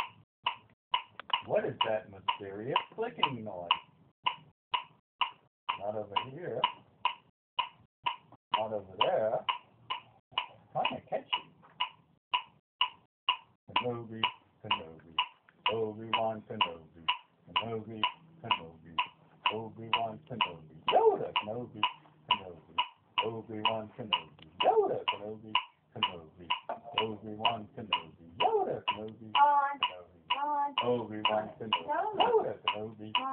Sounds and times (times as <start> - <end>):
Speech: 1.4 - 3.8, 5.7 - 6.8, 8.6 - 9.5, 10.7 - 11.5, 13.7 - 33.3.